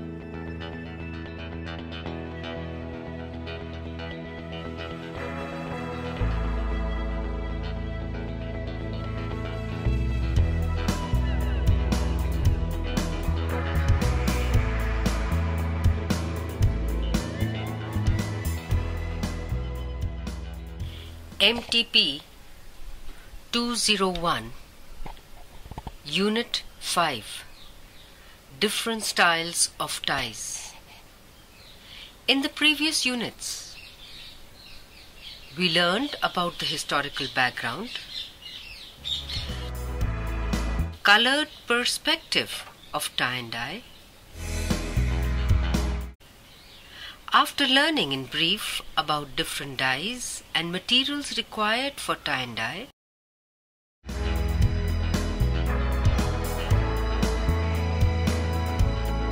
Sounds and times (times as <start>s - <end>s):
Music: 0.0s - 21.4s, 39.0s - 41.0s, 44.4s - 46.2s, 54.0s - 59.3s
Speech: 21.4s - 22.3s, 23.5s - 24.6s, 26.1s - 27.5s, 28.6s - 30.8s, 32.3s - 33.8s, 35.6s - 38.0s, 41.0s - 43.9s, 47.3s - 52.9s.